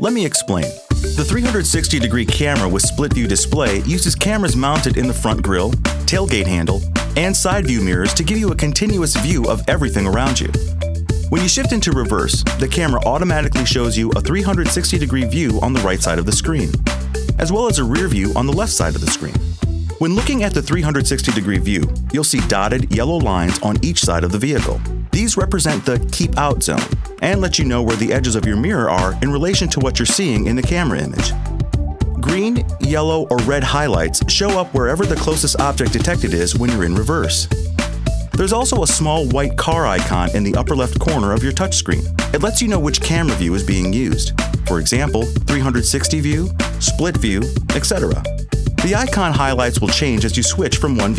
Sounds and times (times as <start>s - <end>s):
Speech: 0.0s - 10.6s, 11.3s - 16.8s, 17.4s - 19.4s, 20.0s - 31.4s, 32.2s - 37.6s, 38.3s - 51.1s
Music: 0.0s - 51.1s.